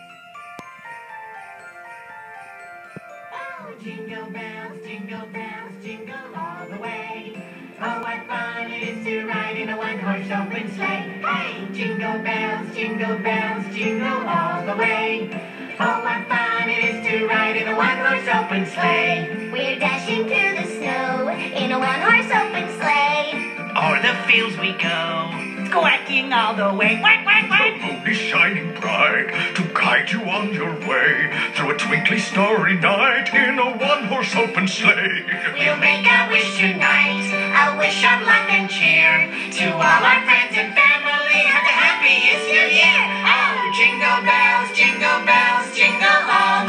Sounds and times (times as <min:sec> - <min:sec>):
Christian music: 0:00.0 - 0:46.6
Christmas music: 0:00.0 - 0:46.6
Speech: 0:25.8 - 0:30.8.